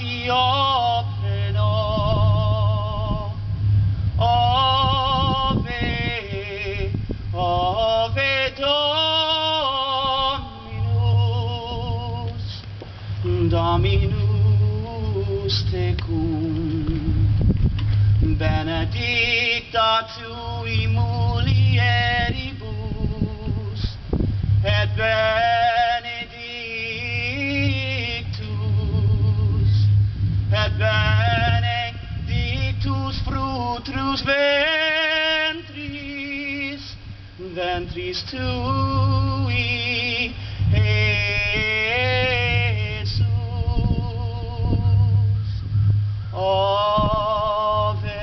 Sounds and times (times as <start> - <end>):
Male singing: 0.0 - 3.5, 4.2 - 17.4, 18.2 - 45.6, 46.3 - 48.2.